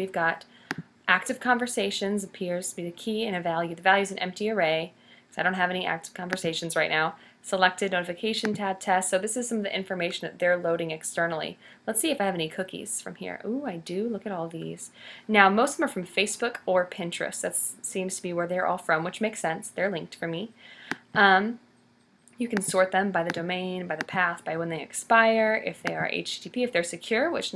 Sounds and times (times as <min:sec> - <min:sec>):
Speech: 0:00.0 - 0:00.5, 0:01.1 - 0:20.5, 0:21.1 - 0:21.6, 0:22.4 - 0:27.5.